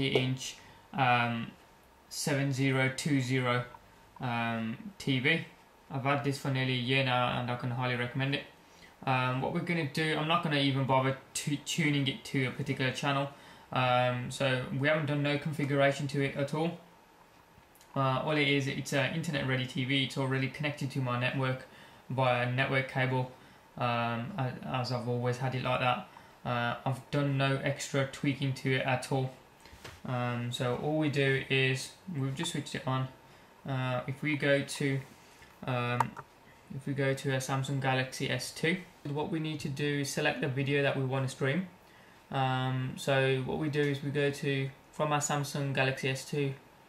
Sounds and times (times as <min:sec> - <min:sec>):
Speech: 0:00.0 - 0:16.9, 0:17.9 - 0:29.4, 0:30.0 - 0:46.6.